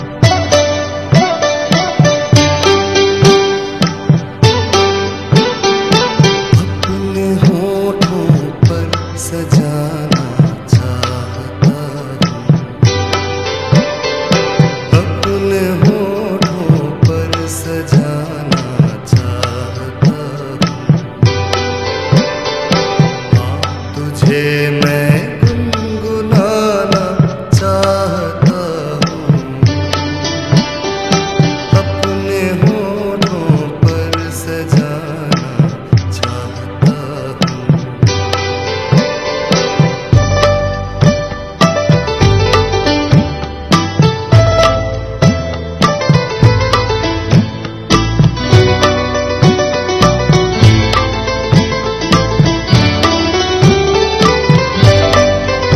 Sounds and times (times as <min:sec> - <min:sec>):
Music: 0:00.0 - 0:55.7.